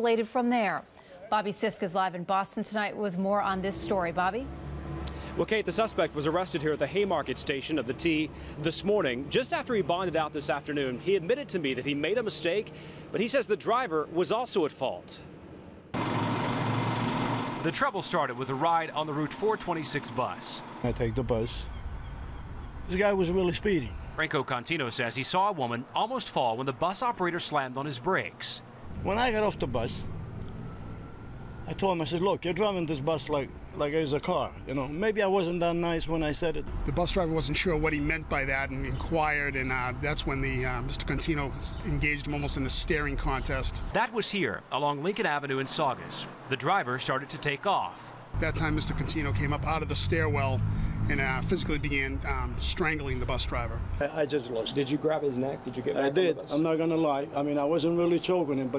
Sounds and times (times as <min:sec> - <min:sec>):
Bus: 0:03.3 - 0:11.0, 0:15.2 - 0:22.8, 0:28.2 - 0:32.4, 0:45.2 - 0:52.2
Speech: 0:17.6 - 0:21.7, 0:22.9 - 0:30.0, 0:31.7 - 0:58.7.